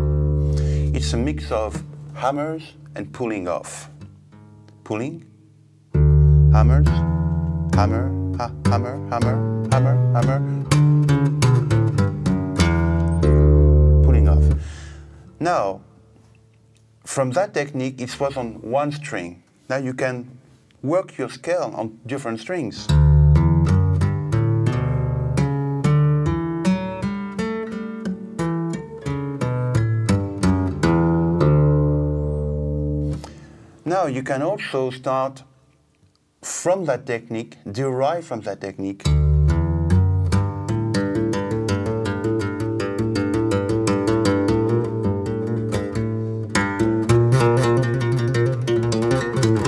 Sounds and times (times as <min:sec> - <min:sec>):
Acoustic guitar: 0:00.0 - 0:17.1, 0:22.9 - 0:33.9, 0:39.0 - 0:49.6
Speech: 0:00.9 - 0:04.0, 0:04.8 - 0:05.3, 0:06.5 - 0:07.1, 0:07.7 - 0:10.6, 0:14.0 - 0:14.6, 0:15.4 - 0:15.8, 0:17.0 - 0:22.9, 0:33.8 - 0:35.6, 0:36.4 - 0:39.1.